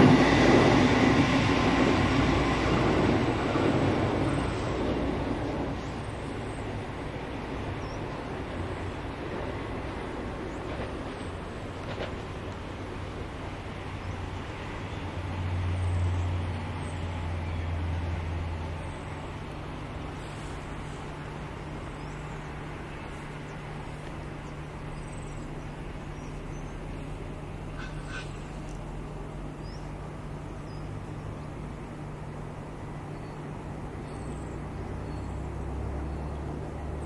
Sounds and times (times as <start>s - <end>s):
Railroad car, train wagon: 0.0s - 37.0s
Train: 0.0s - 37.0s.